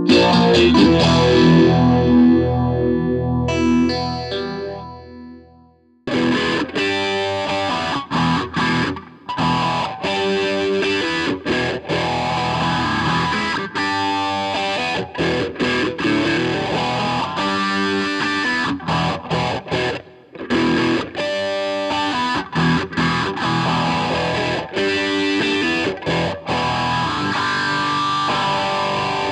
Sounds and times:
Distortion: 0.0s - 29.3s
Effects unit: 0.0s - 29.3s
Electric guitar: 0.0s - 29.3s.

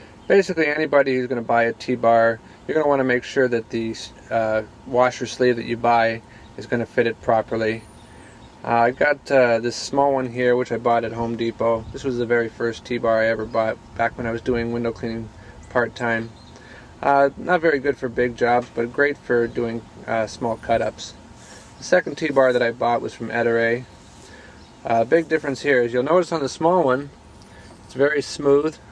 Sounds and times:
Speech: 0.3s - 7.9s, 8.6s - 16.4s, 17.0s - 21.2s, 21.8s - 23.9s, 24.8s - 27.2s, 27.9s - 28.8s.

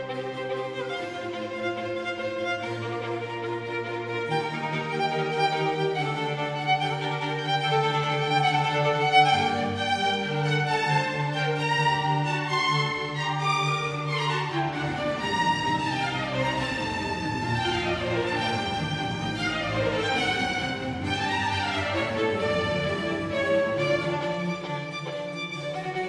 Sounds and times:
Violin, fiddle: 0.0s - 26.0s.

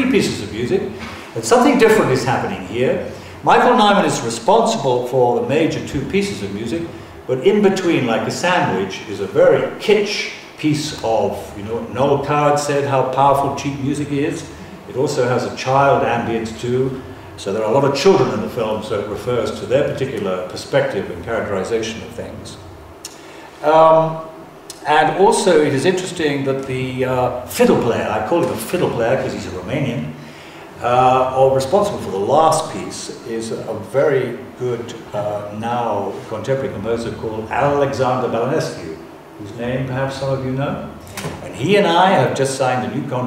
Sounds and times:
Speech: 0.0s - 22.7s, 23.6s - 30.2s, 30.8s - 43.2s.

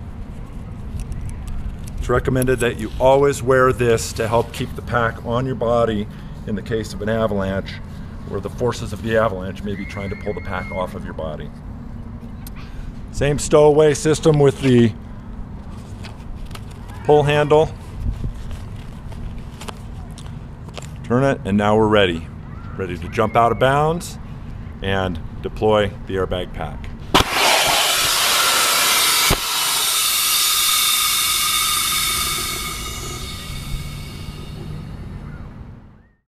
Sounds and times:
Speech: 2.0s - 11.6s, 13.2s - 15.0s, 16.9s - 17.8s, 21.1s - 24.2s, 24.8s - 27.0s
Outside, rural or natural: 27.1s - 36.0s.

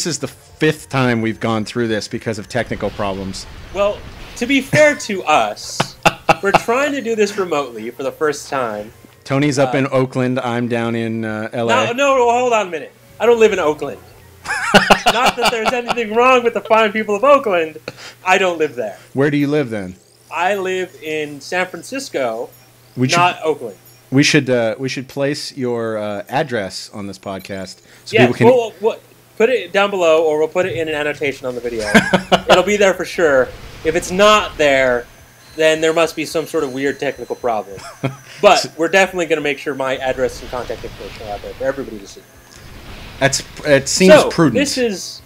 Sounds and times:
Speech: 0.0s - 14.0s, 15.1s - 35.0s, 35.6s - 37.8s, 38.4s - 42.2s, 43.2s - 45.2s.

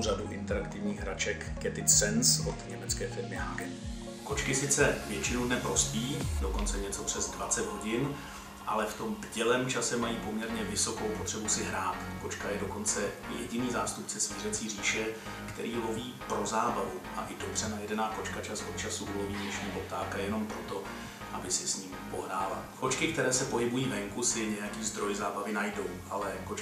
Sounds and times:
Speech: 0.0s - 3.7s, 4.3s - 26.6s
Music: 0.0s - 26.6s.

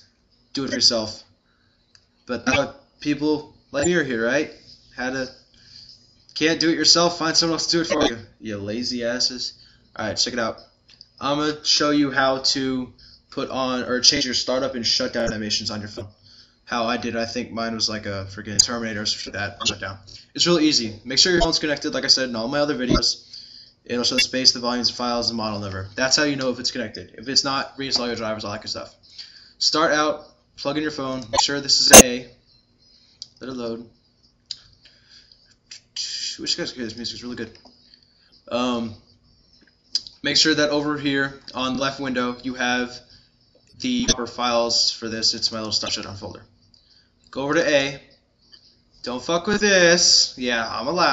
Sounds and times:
Speech: 0.6s - 1.3s, 2.3s - 5.4s, 6.4s - 23.2s, 23.9s - 29.0s, 29.6s - 32.4s, 33.4s - 34.0s, 35.8s - 37.6s, 38.5s - 39.0s, 40.0s - 43.1s, 43.8s - 46.5s, 47.3s - 48.1s, 49.0s - 51.1s.

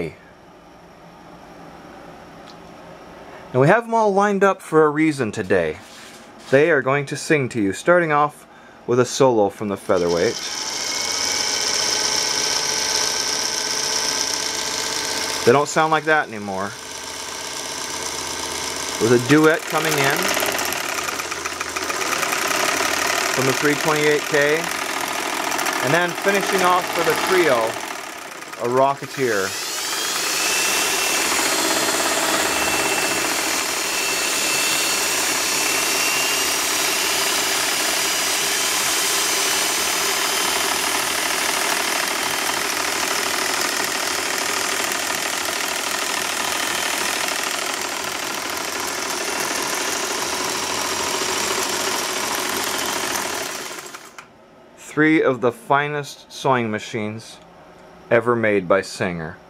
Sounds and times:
Speech: 0.0s - 0.2s, 3.6s - 5.9s, 6.5s - 10.5s, 15.5s - 16.8s, 19.0s - 20.4s, 23.4s - 24.8s, 25.8s - 27.8s, 28.6s - 29.5s, 54.8s - 57.4s, 58.1s - 59.4s
Sewing machine: 10.0s - 54.3s.

